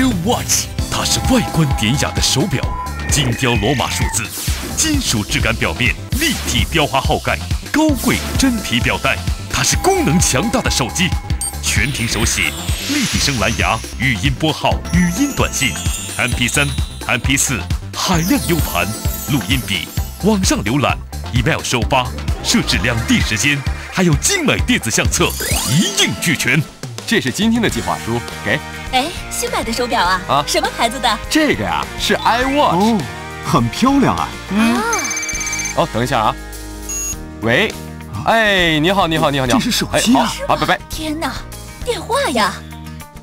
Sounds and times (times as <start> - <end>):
Speech: 0.0 - 35.0, 35.8 - 36.4, 37.4 - 42.6
Music: 0.0 - 43.2.